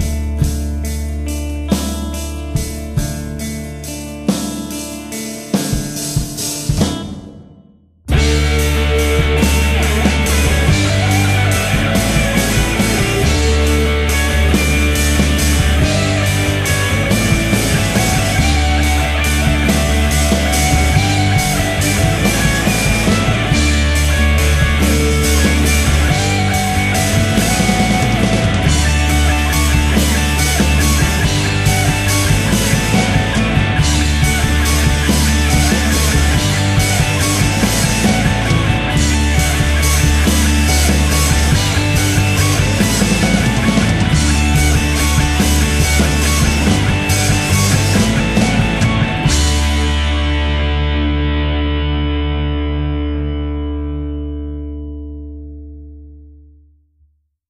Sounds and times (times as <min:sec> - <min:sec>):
Punk rock: 0:00.0 - 0:53.8.